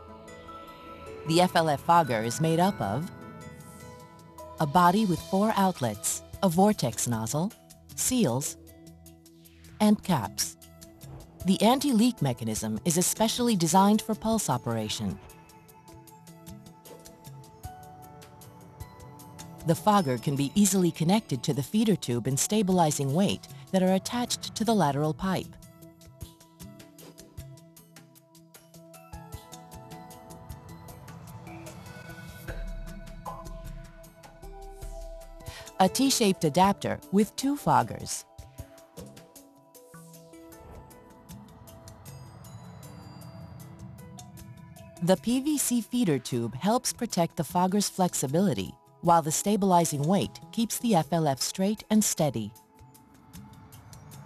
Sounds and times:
Music: 0:00.0 - 0:54.2
Speech: 0:01.3 - 0:03.1, 0:04.6 - 0:08.6, 0:09.8 - 0:10.6, 0:11.5 - 0:15.2, 0:19.7 - 0:25.5, 0:35.6 - 0:38.2, 0:45.0 - 0:52.5.

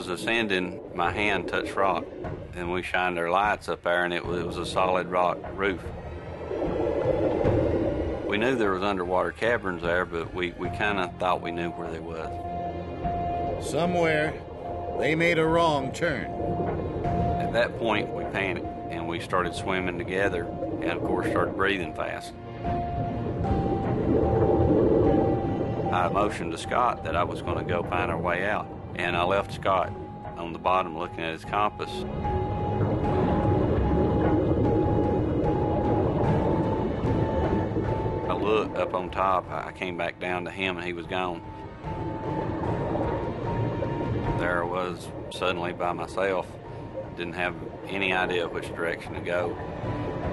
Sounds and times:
Speech: 0:00.0 - 0:02.0, 0:02.6 - 0:05.9, 0:08.3 - 0:12.3, 0:13.6 - 0:14.4, 0:15.0 - 0:16.3, 0:17.4 - 0:22.3, 0:25.9 - 0:32.0, 0:38.3 - 0:41.4, 0:44.4 - 0:46.5, 0:47.2 - 0:49.6
Music: 0:00.0 - 0:50.3.

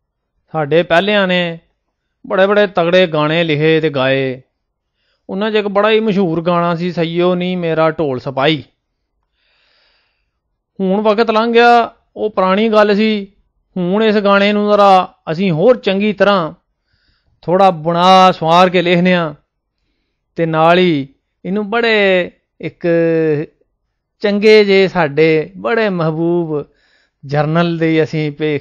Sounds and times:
Speech: 0:00.5 - 0:01.7, 0:02.3 - 0:04.5, 0:05.3 - 0:08.7, 0:10.8 - 0:16.6, 0:17.4 - 0:19.4, 0:20.4 - 0:23.6, 0:24.2 - 0:28.6.

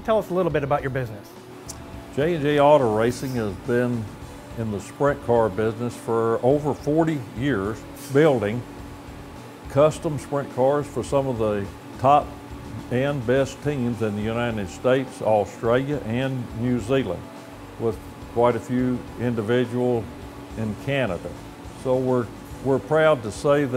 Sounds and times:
Speech: 0:00.0 - 0:01.3, 0:02.2 - 0:08.6, 0:09.7 - 0:17.2, 0:17.8 - 0:23.7
Music: 0:00.0 - 0:23.7.

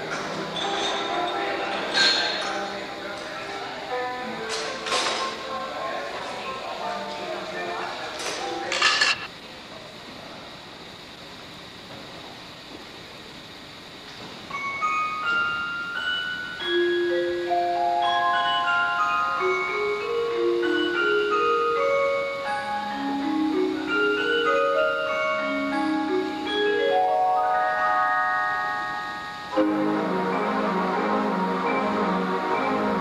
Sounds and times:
Music: 0:00.0 - 0:07.8, 0:14.5 - 0:33.0.

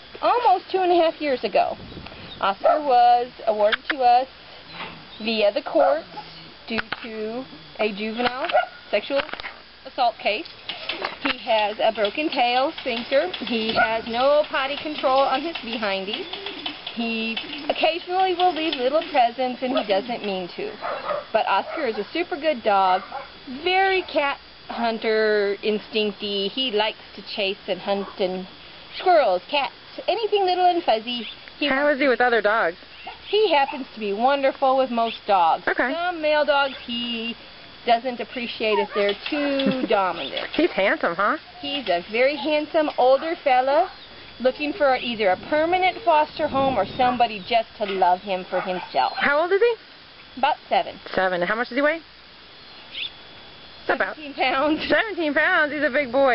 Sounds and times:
Speech: 0:00.2 - 0:01.8, 0:02.4 - 0:04.3, 0:05.2 - 0:06.1, 0:06.7 - 0:10.5, 0:11.2 - 0:16.3, 0:17.0 - 0:20.8, 0:21.4 - 0:49.8, 0:50.4 - 0:52.1, 0:53.9 - 0:56.3
Bow-wow: 0:20.8 - 0:21.9, 0:48.6 - 0:49.3.

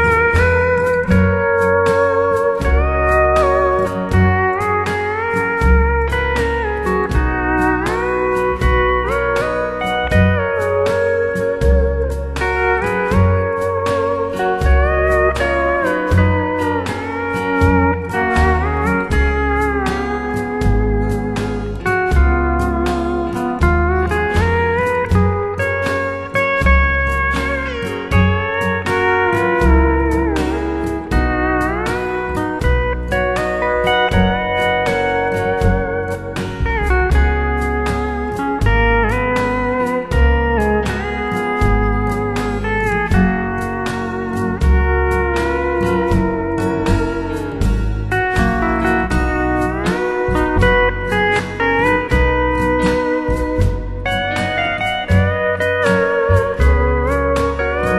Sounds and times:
Country: 0:00.0 - 0:57.9
Steel guitar, slide guitar: 0:00.0 - 0:57.9.

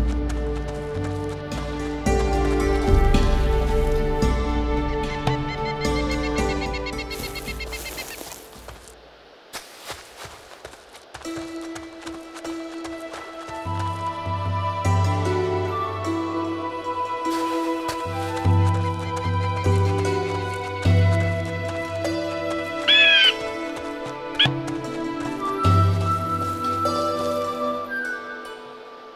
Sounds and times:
Music: 0:00.0 - 0:08.9, 0:11.1 - 0:29.1.

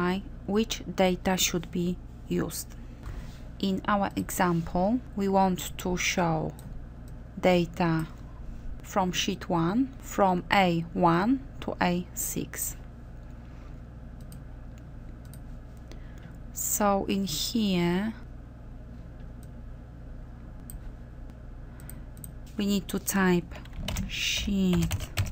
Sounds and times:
Speech: 0:00.0 - 0:02.8, 0:03.6 - 0:06.6, 0:07.4 - 0:08.2, 0:08.9 - 0:12.8, 0:16.6 - 0:18.3, 0:22.6 - 0:25.0.

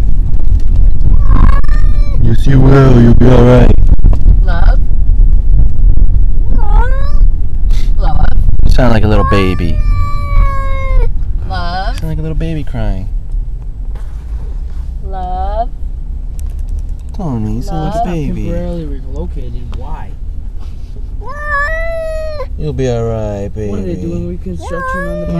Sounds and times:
Speech: 0:17.2 - 0:20.0, 0:22.6 - 0:25.3.

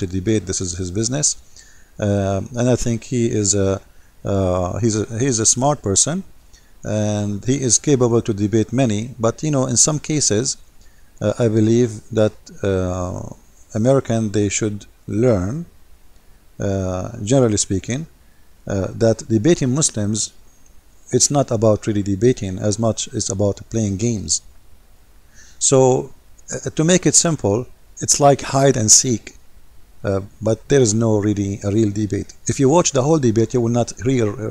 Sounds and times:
Speech: 0:00.0 - 0:01.4, 0:02.0 - 0:10.6, 0:11.2 - 0:15.7, 0:16.6 - 0:18.1, 0:18.7 - 0:20.4, 0:21.1 - 0:24.5, 0:25.6 - 0:29.4, 0:30.0 - 0:34.5.

